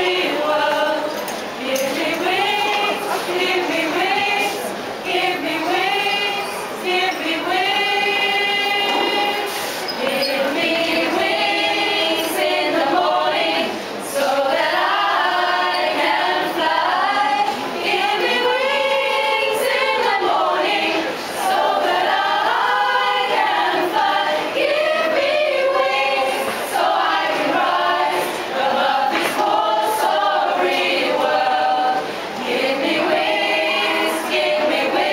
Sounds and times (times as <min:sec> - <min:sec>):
Choir: 0:00.0 - 0:35.1.